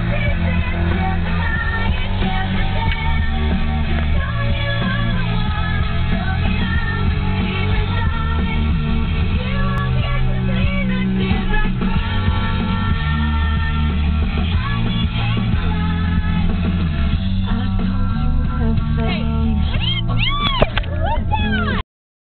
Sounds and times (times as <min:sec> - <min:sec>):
Female singing: 0:00.0 - 0:21.8
Music: 0:00.0 - 0:21.8
Speech: 0:18.7 - 0:20.0, 0:20.9 - 0:21.8.